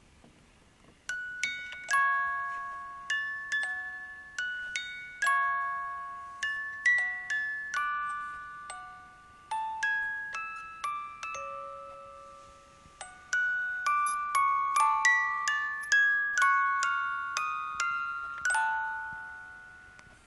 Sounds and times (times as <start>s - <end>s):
Music: 0.9s - 20.2s.